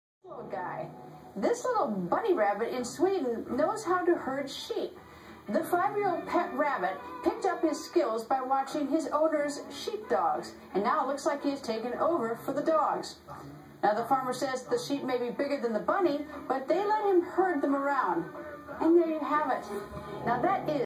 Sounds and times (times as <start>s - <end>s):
Speech: 0.2s - 20.8s.